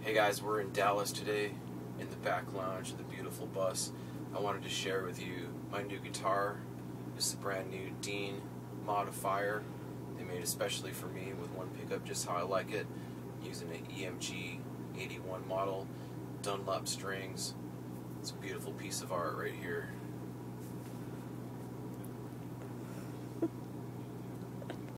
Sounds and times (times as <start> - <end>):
Speech: 0.0 - 6.6, 7.2 - 17.6, 18.2 - 20.0.